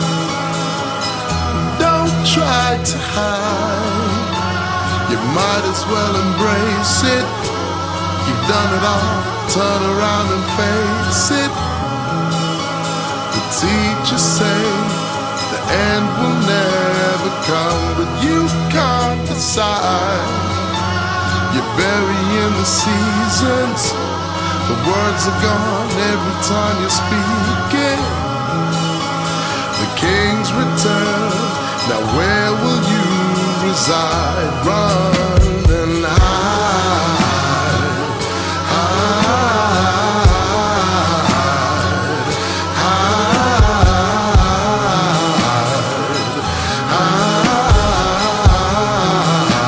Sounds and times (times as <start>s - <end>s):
Electronica: 0.0s - 49.6s.